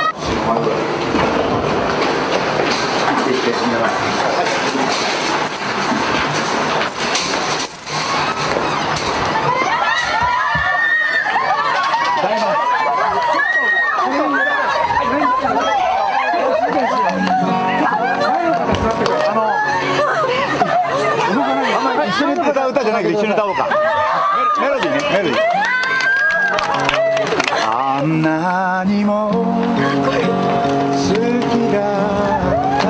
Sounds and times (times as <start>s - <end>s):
Outside, urban or manmade: 0.0s - 32.9s.